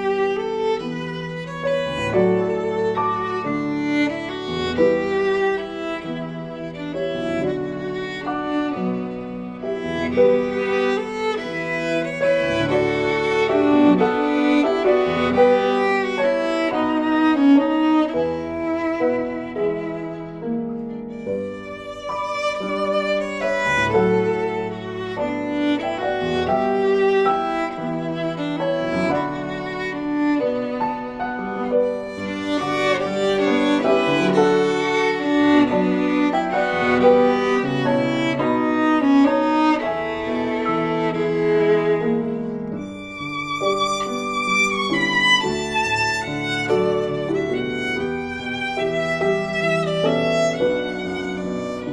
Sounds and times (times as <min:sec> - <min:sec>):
Violin, fiddle: 0:00.0 - 0:51.9.